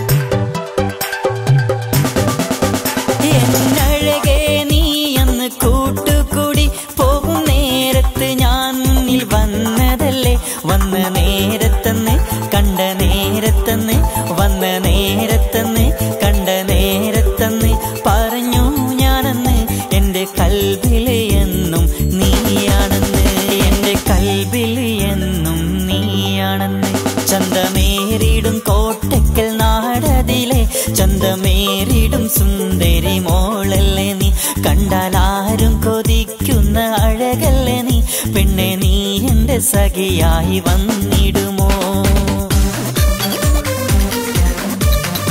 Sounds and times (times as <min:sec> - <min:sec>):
Dance music: 0:00.0 - 0:45.3.